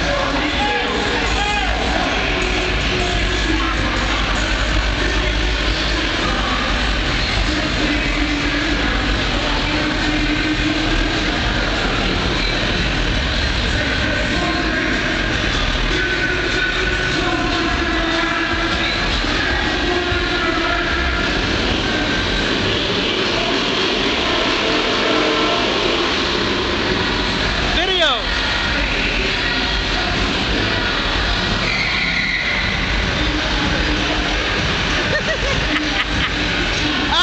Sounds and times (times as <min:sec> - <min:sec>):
Car: 0:00.0 - 0:37.2
Music: 0:00.0 - 0:37.2.